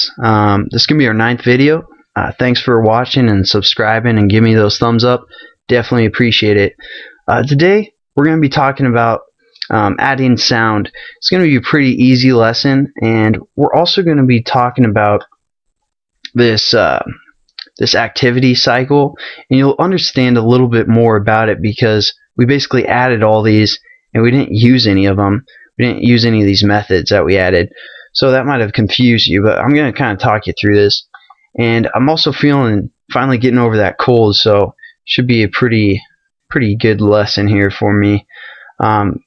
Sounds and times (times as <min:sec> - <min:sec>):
Speech: 0:00.0 - 0:15.3, 0:16.3 - 0:39.2.